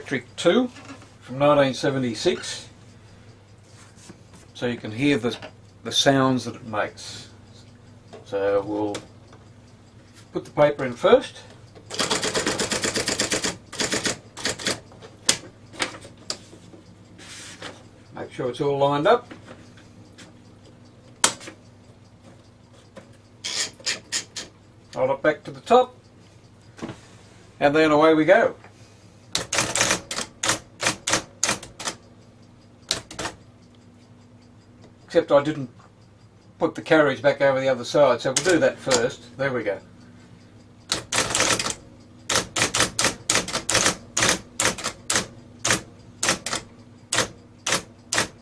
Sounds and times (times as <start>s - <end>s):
Speech: 0.0s - 2.7s, 4.6s - 7.4s, 8.3s - 9.1s, 10.3s - 11.5s, 18.2s - 19.3s, 25.0s - 26.0s, 27.6s - 28.6s, 35.1s - 35.8s, 36.6s - 39.9s
Typewriter: 11.9s - 15.4s, 23.4s - 24.5s, 29.4s - 32.0s, 32.9s - 33.4s, 40.9s - 48.4s.